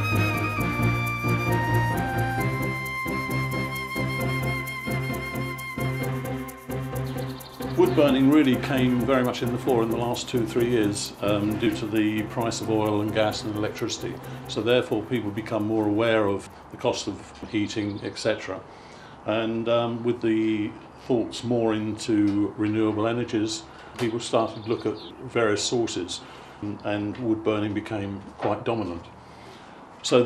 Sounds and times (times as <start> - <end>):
Speech: 7.8 - 18.7, 19.3 - 29.1, 30.0 - 30.2.